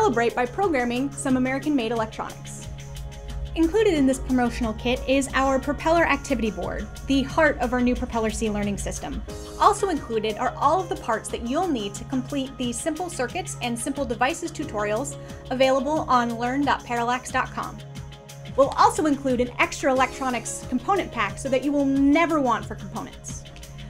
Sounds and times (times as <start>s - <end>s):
Speech: 0.0s - 2.6s, 3.6s - 17.8s, 18.6s - 23.4s
Music: 0.0s - 23.9s.